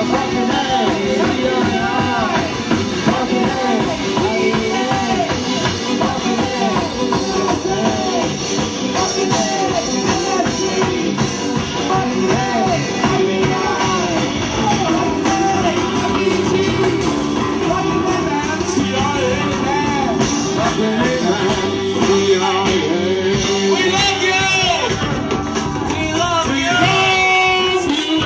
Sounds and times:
Music of Latin America: 0.0 - 28.2.

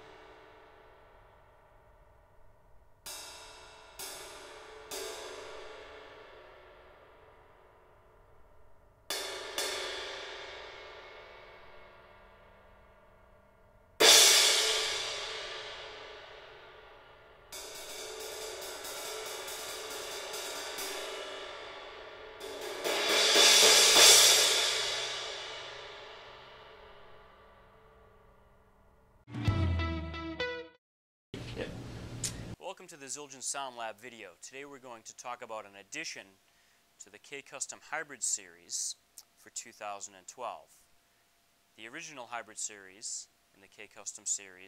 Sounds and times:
Music: 0.0 - 30.8.

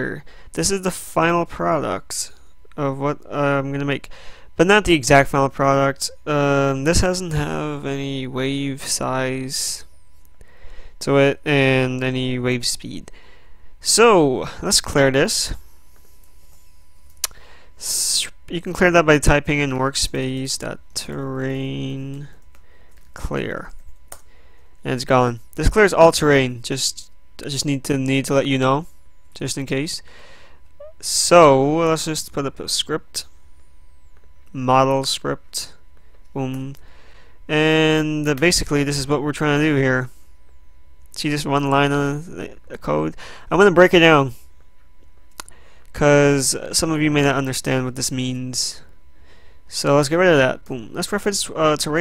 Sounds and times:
Speech: 0.0 - 9.9, 11.0 - 13.1, 13.8 - 15.6, 17.8 - 22.4, 23.2 - 23.7, 24.8 - 30.1, 30.8 - 33.3, 34.5 - 36.8, 37.5 - 40.1, 41.1 - 44.4, 45.9 - 48.9, 49.7 - 52.0.

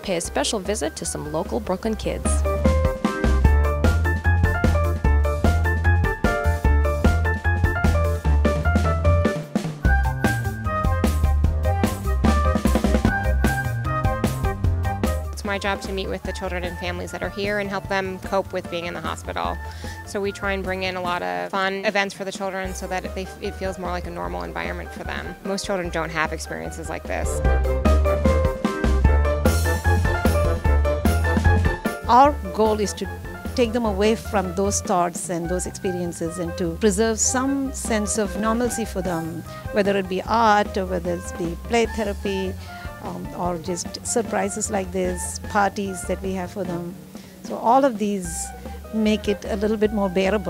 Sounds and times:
Speech: 0.0 - 2.4, 15.4 - 27.4, 32.1 - 50.5
Music: 0.0 - 50.5.

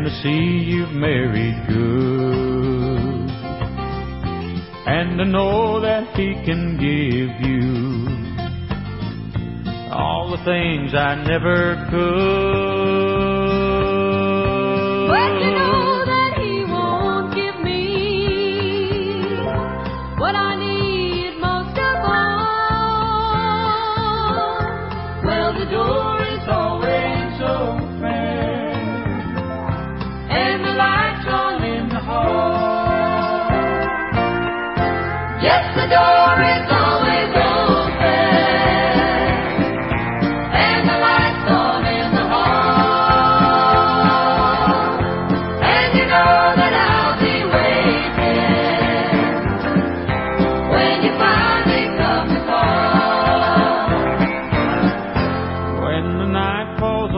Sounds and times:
Music: 0.0 - 57.1.

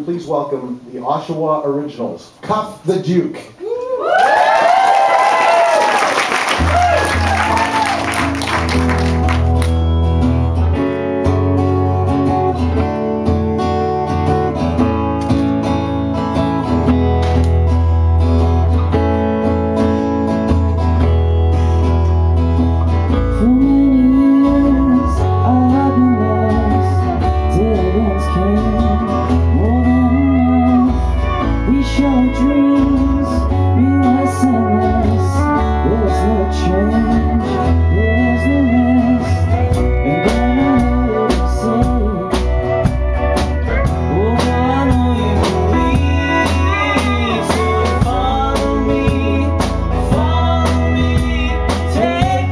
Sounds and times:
Music: 6.0 - 52.5.

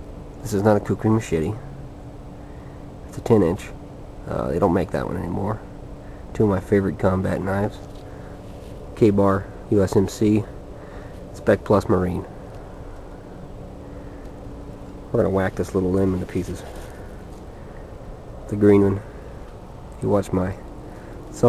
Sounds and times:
Speech: 0.4 - 1.7, 3.1 - 5.7, 6.3 - 7.8, 9.0 - 10.5, 11.4 - 12.3, 15.1 - 16.8, 18.5 - 19.1, 20.0 - 20.6.

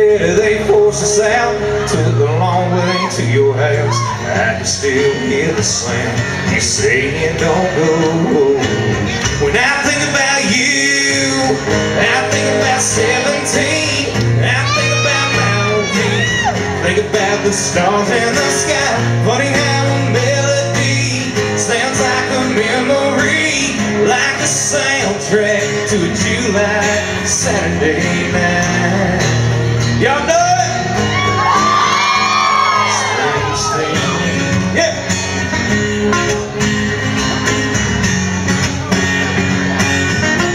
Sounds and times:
Male singing: 0.0 - 35.0
Music: 0.0 - 40.5.

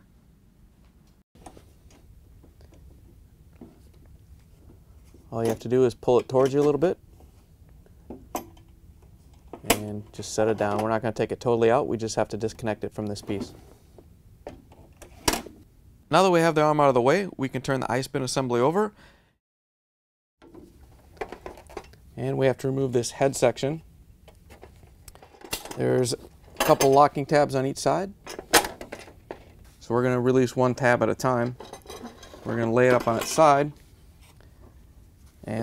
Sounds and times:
Speech: 5.3 - 7.0, 9.7 - 13.6, 16.1 - 19.0, 22.2 - 23.9, 25.8 - 28.2, 29.8 - 31.6, 32.4 - 33.8.

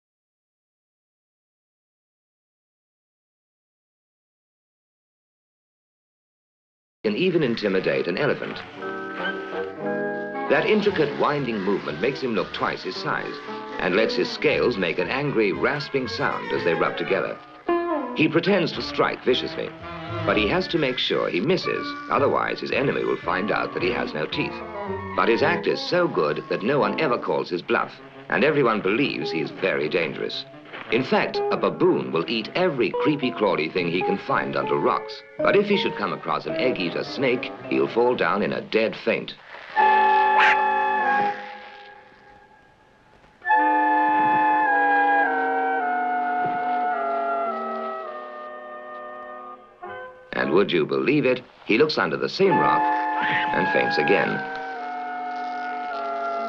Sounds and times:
Music: 7.0 - 56.4
Speech: 7.1 - 8.7, 10.5 - 17.4, 18.2 - 24.6, 25.2 - 39.4, 50.4 - 54.5.

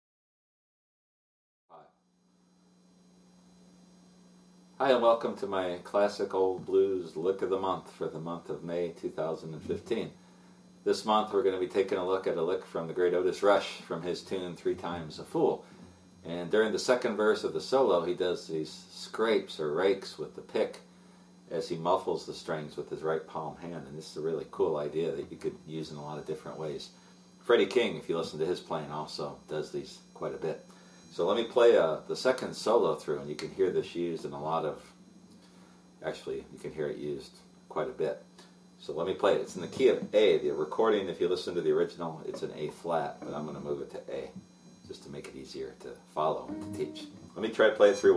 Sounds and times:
Speech: 4.8 - 10.2, 10.8 - 20.9, 21.5 - 35.0, 36.0 - 48.1.

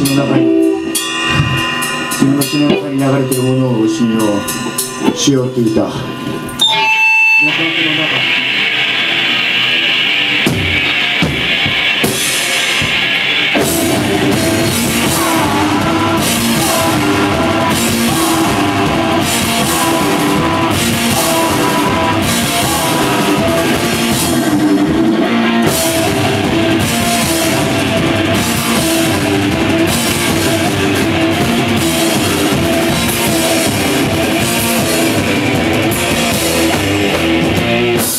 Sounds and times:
Guitar: 0.0 - 38.1
Rock music: 0.0 - 38.1
Singing: 13.8 - 24.4.

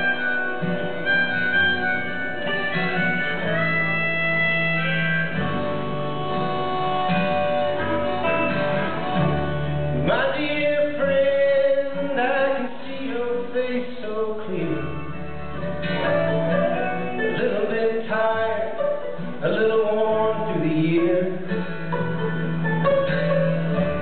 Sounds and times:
Music: 0.0 - 24.0.

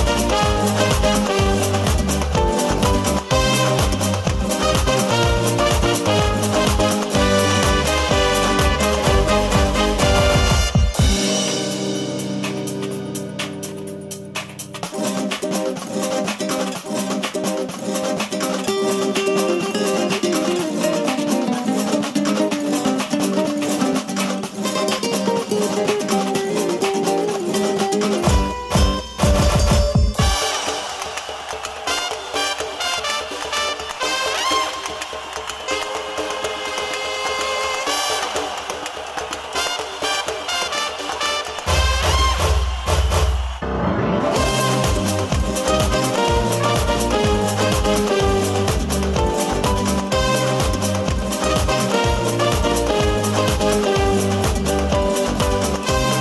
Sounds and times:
Theme music: 0.0 - 56.2.

